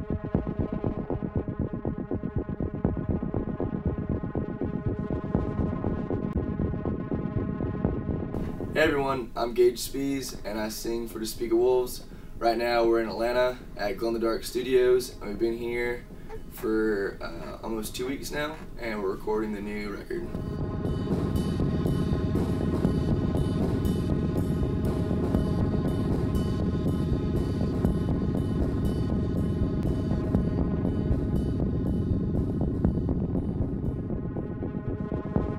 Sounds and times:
Music: 0:00.0 - 0:35.5
Speech: 0:08.8 - 0:16.0, 0:16.6 - 0:20.3.

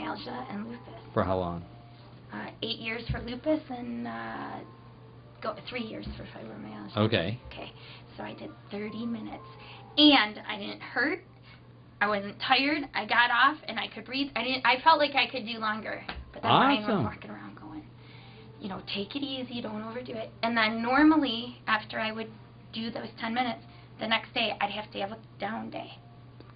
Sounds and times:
Speech: 0:16.5 - 0:17.2.

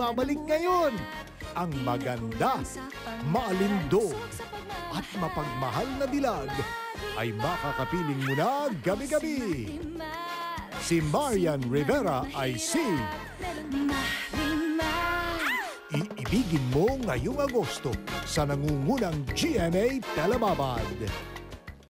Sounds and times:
Music: 0:00.0 - 0:21.8
Speech: 0:16.0 - 0:21.2.

